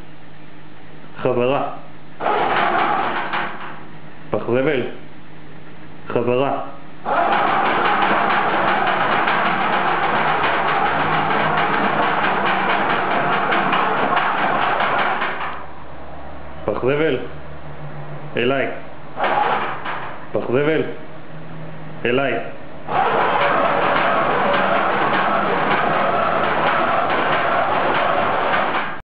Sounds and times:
Male speech, man speaking: 0:01.2 - 0:01.8, 0:04.4 - 0:05.0, 0:06.1 - 0:06.8, 0:16.7 - 0:17.3, 0:18.4 - 0:18.8, 0:20.4 - 0:21.0, 0:22.0 - 0:22.6.

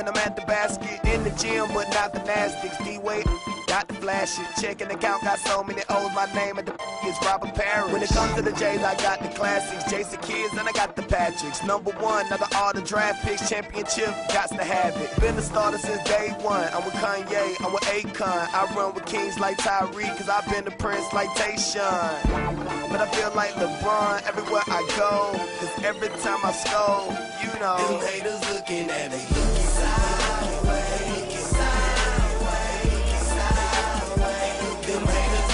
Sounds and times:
Music: 0:00.0 - 0:35.5.

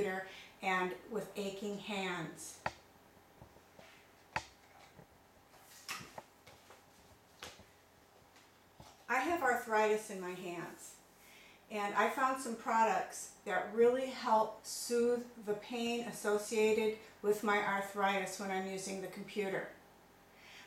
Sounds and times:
Speech: 0:00.0 - 0:02.7, 0:09.1 - 0:11.0, 0:11.7 - 0:19.8.

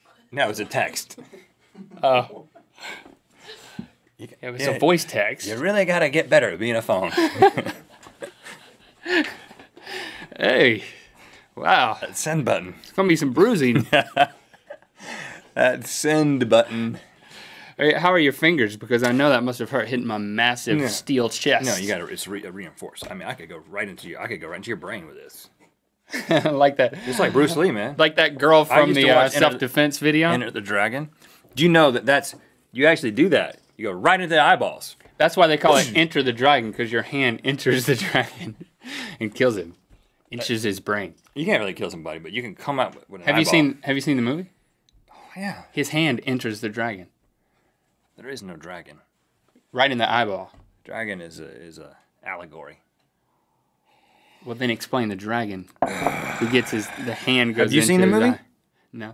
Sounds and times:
Speech: 0:04.2 - 0:07.2, 0:17.8 - 0:25.5, 0:26.4 - 0:38.4, 0:39.2 - 0:44.5, 0:56.4 - 0:59.1.

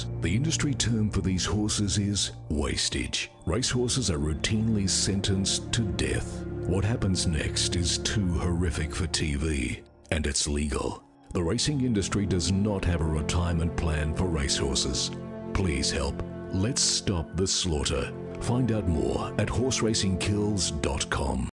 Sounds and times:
Music: 0:00.0 - 0:21.5
Speech: 0:00.0 - 0:21.5.

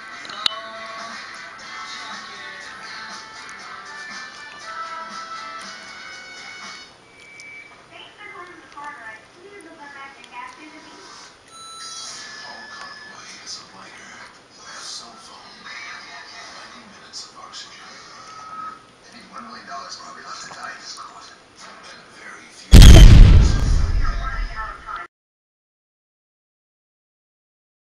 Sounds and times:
Speech: 0:07.9 - 0:11.0, 0:19.0 - 0:22.7, 0:24.0 - 0:25.1.

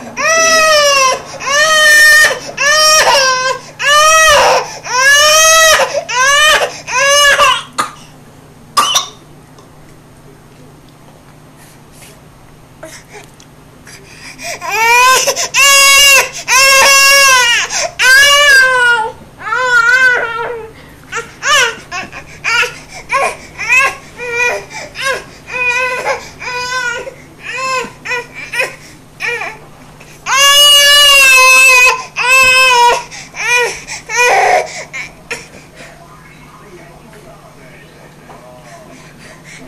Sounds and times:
Baby cry, infant cry: 0:00.2 - 0:07.7, 0:14.5 - 0:29.6, 0:30.3 - 0:35.5.

